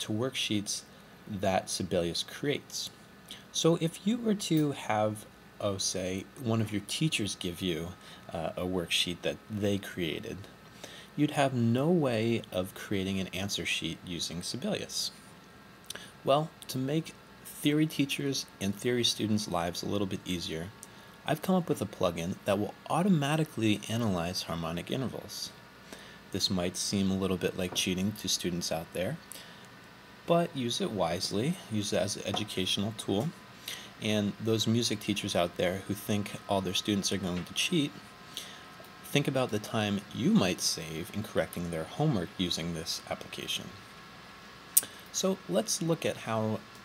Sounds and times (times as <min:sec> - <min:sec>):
Speech: 0:00.0 - 0:10.5, 0:11.2 - 0:15.2, 0:16.3 - 0:25.6, 0:26.3 - 0:29.2, 0:30.3 - 0:33.4, 0:34.0 - 0:38.0, 0:39.0 - 0:43.8, 0:45.1 - 0:46.7.